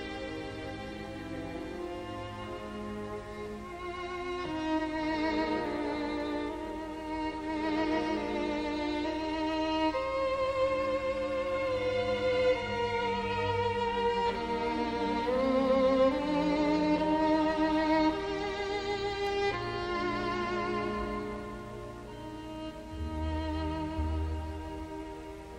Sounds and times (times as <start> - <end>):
Violin, fiddle: 0.0 - 25.5.